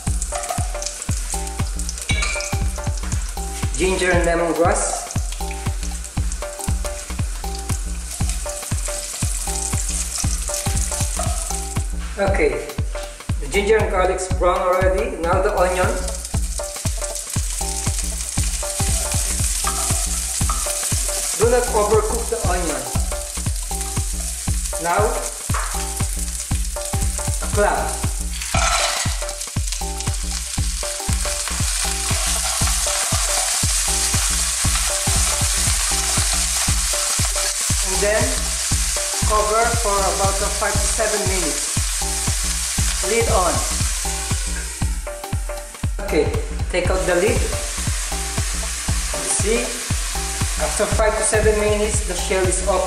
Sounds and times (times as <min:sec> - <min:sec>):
Frying (food): 0:00.0 - 0:52.8
Sizzle: 0:00.0 - 0:52.8.